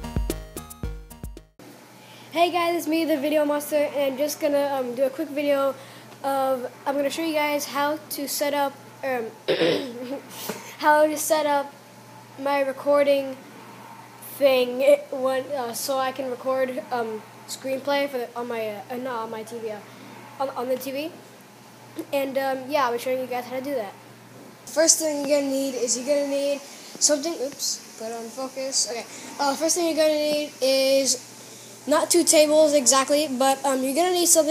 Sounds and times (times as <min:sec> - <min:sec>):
Speech: 0:02.4 - 0:10.2, 0:10.8 - 0:11.8, 0:12.4 - 0:13.4, 0:14.3 - 0:19.8, 0:20.4 - 0:21.2, 0:22.0 - 0:24.0, 0:24.7 - 0:31.2, 0:31.9 - 0:34.5.